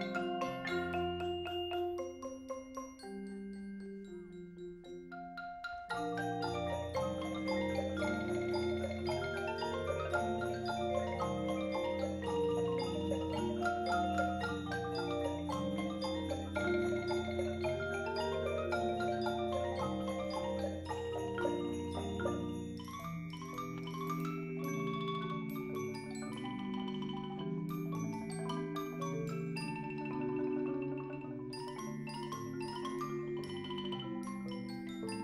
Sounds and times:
Glockenspiel: 0.0s - 35.2s
Marimba, xylophone: 0.0s - 35.2s.

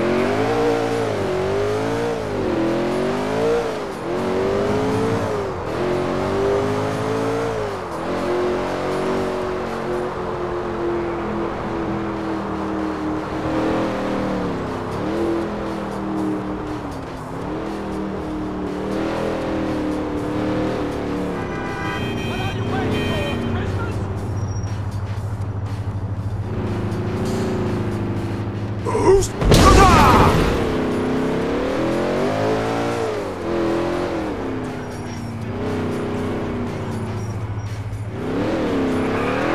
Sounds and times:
Accelerating, revving, vroom: 0.0s - 21.4s, 30.2s - 39.5s
Car: 0.0s - 39.5s
Speech: 22.3s - 24.0s, 28.9s - 30.3s.

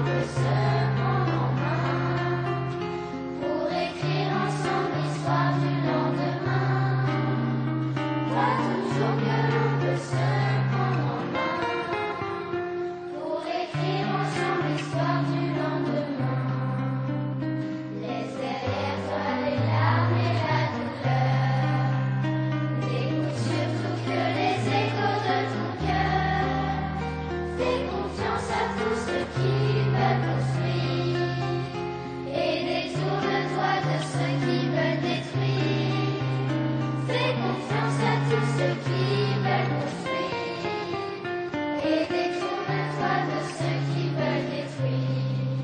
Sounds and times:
Music: 0.0s - 45.6s.

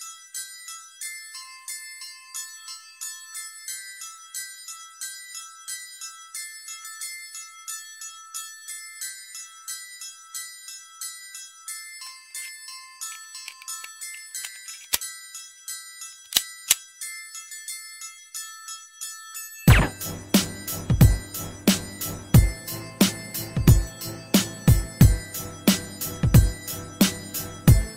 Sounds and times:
Glockenspiel: 0.0s - 27.9s.

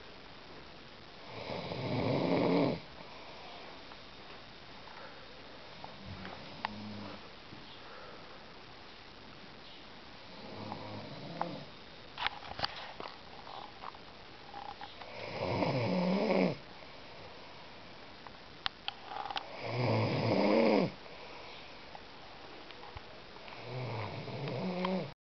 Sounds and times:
Snoring: 1.2s - 2.9s, 6.4s - 7.2s, 10.3s - 11.7s, 15.1s - 16.6s, 19.5s - 21.0s, 23.5s - 25.1s.

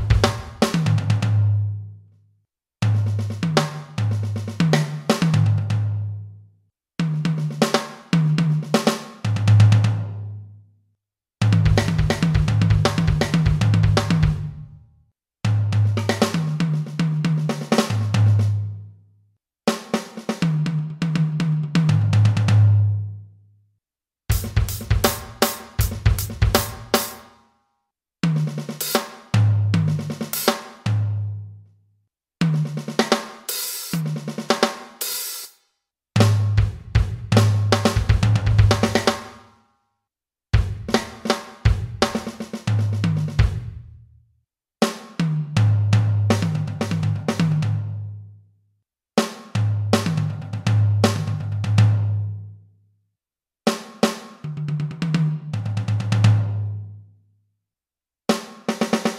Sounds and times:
Music: 0.0s - 10.8s, 11.4s - 23.6s, 24.3s - 31.8s, 32.4s - 40.0s, 40.6s - 44.1s, 44.8s - 48.4s, 49.2s - 52.7s, 53.7s - 57.3s, 58.3s - 59.1s.

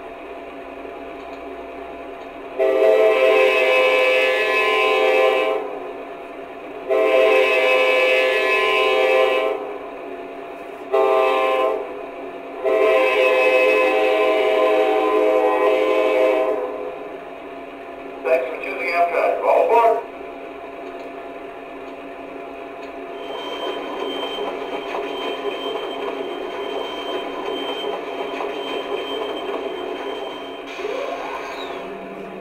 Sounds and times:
Speech: 18.3s - 20.1s.

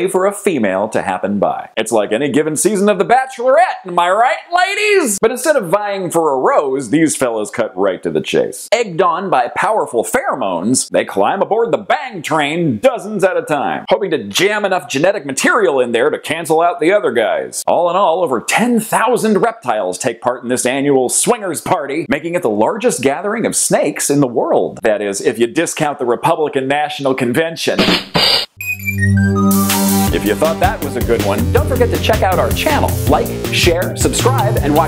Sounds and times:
Speech: 0.0s - 27.8s, 30.1s - 34.8s.

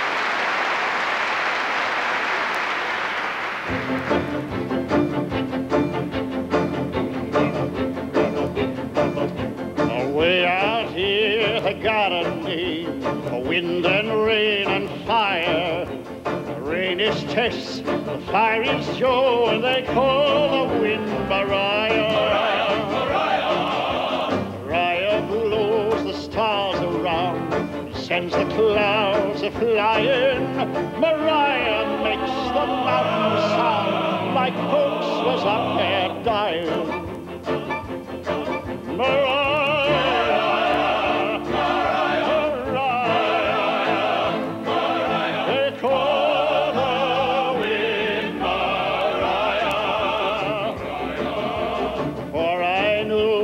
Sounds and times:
Music: 2.8s - 53.4s.

